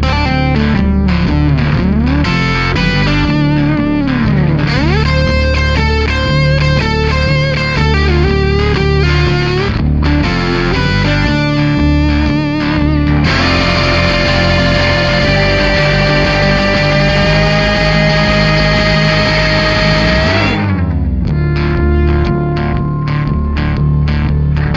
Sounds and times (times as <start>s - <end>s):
Distortion: 0.0s - 24.7s
Musical instrument: 13.2s - 21.2s.